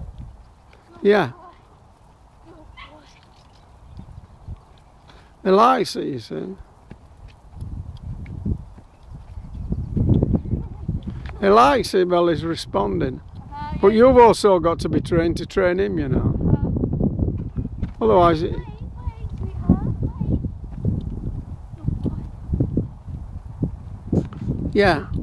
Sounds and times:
Clip-clop: 0.0 - 11.9, 16.5 - 25.2.

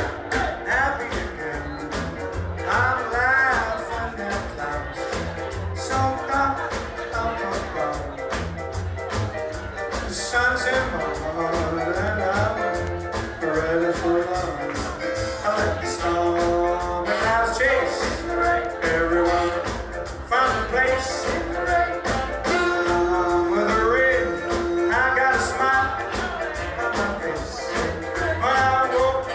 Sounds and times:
Music: 0.0 - 29.3
Male singing: 0.3 - 2.0, 2.6 - 5.2, 5.8 - 8.2, 10.1 - 29.3.

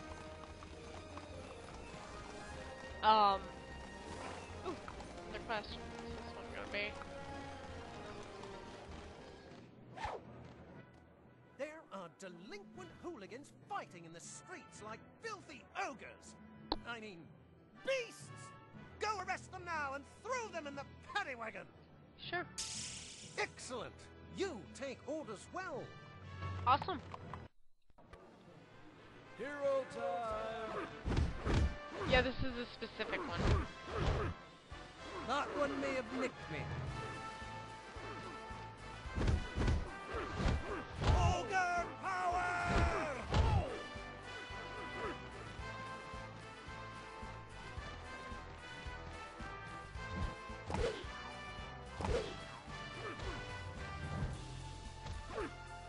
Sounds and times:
Music: 0.0 - 55.8
Speech: 11.6 - 22.5.

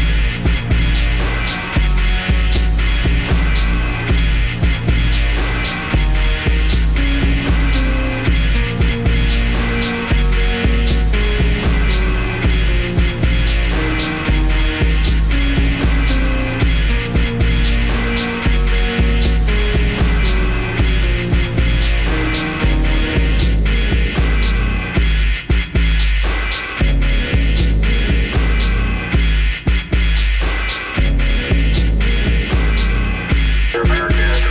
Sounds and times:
Soundtrack music: 0.0 - 34.5.

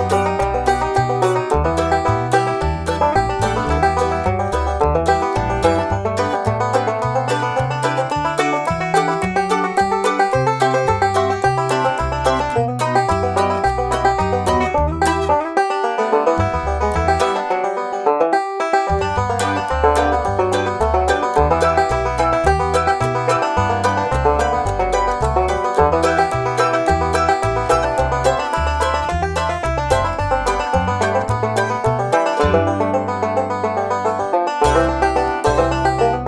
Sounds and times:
Bluegrass: 0.0 - 36.2.

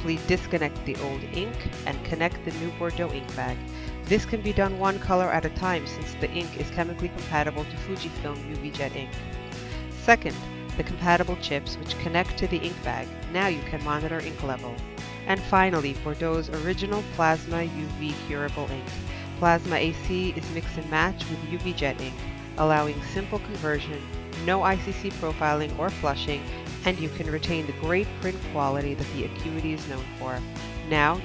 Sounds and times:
Speech: 0.0 - 9.1, 10.0 - 31.2
Music: 0.0 - 31.2.

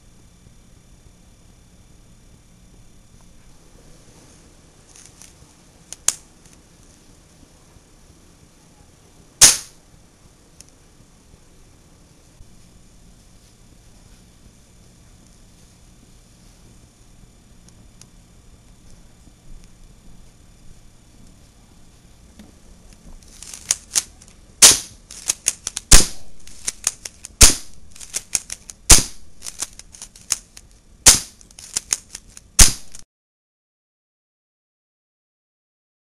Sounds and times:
Cap gun: 9.4 - 9.8, 23.5 - 25.0, 25.7 - 29.7, 31.1 - 31.4, 32.6 - 33.0.

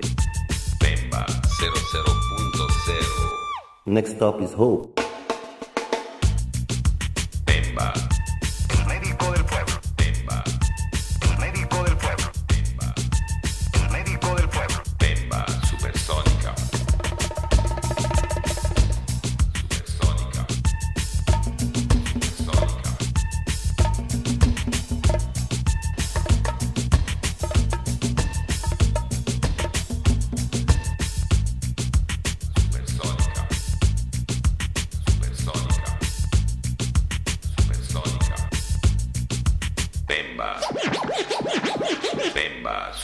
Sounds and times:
Music: 0.0 - 3.6, 5.0 - 42.4.

